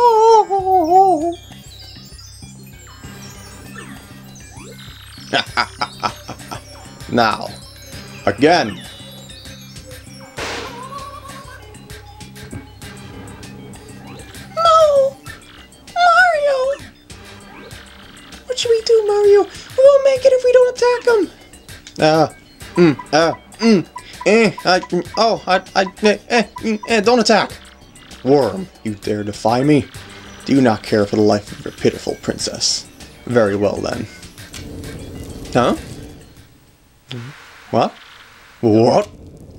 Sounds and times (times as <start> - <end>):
Music: 0.0 - 36.8
Speech: 16.0 - 16.8, 18.5 - 21.4, 28.3 - 29.9, 30.5 - 34.1, 38.6 - 39.1.